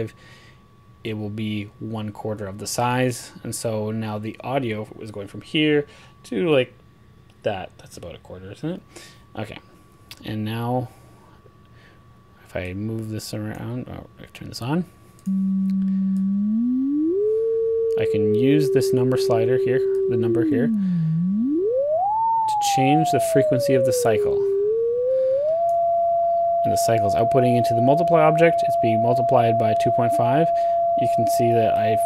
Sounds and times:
Speech: 1.0s - 6.8s, 7.4s - 10.9s, 12.4s - 14.9s, 18.0s - 20.8s, 22.6s - 24.5s, 26.7s - 32.0s.

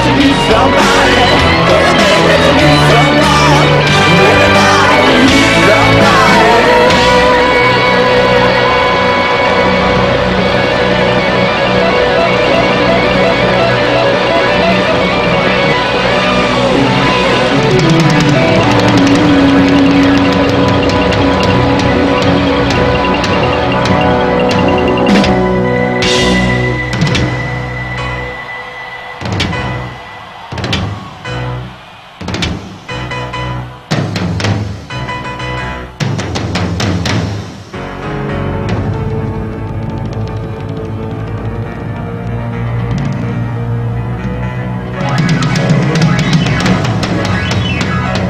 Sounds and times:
Music: 0.0s - 48.2s.

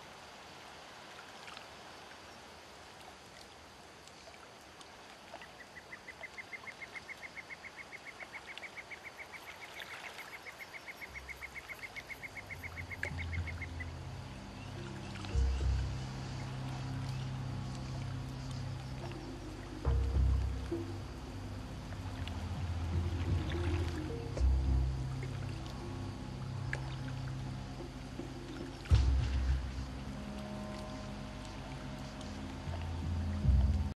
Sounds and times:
Stream: 0.0s - 33.9s
Music: 11.1s - 33.9s.

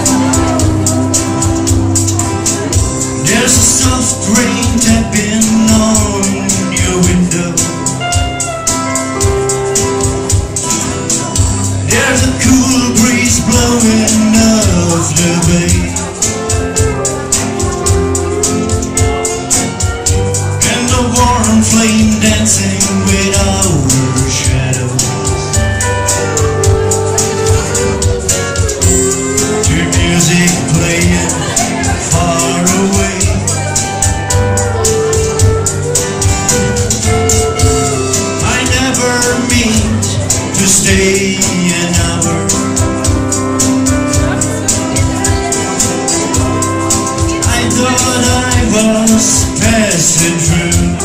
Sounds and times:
Acoustic guitar: 0.0s - 51.0s
Country: 0.0s - 51.0s
Strum: 0.0s - 51.0s.

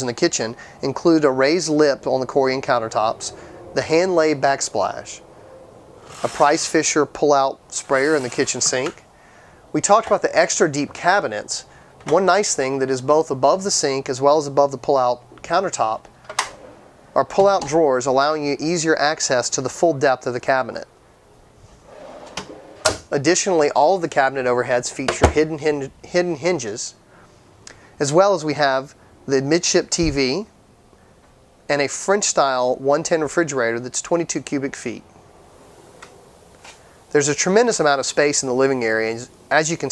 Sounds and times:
Speech: 0.0s - 5.2s, 6.2s - 9.0s, 9.7s - 16.0s, 17.2s - 20.9s, 23.1s - 27.0s, 28.0s - 30.5s, 31.7s - 35.1s, 37.1s - 39.9s.

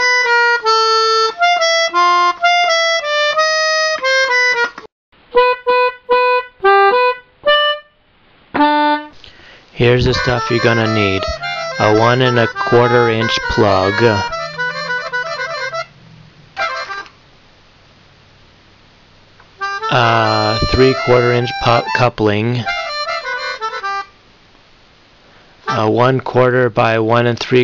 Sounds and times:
Music: 0.0s - 8.0s, 8.6s - 9.2s, 9.8s - 16.0s, 16.6s - 17.2s, 19.6s - 24.2s
Speech: 9.8s - 14.3s, 19.9s - 22.7s, 25.7s - 27.6s.

